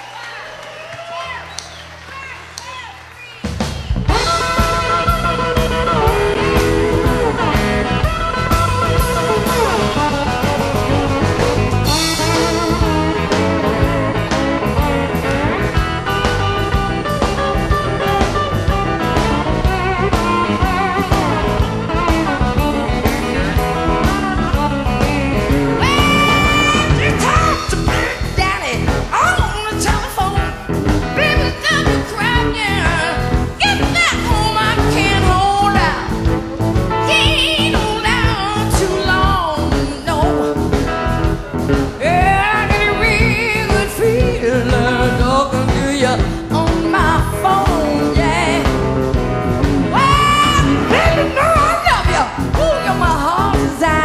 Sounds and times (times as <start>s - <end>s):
Music: 0.5s - 54.0s.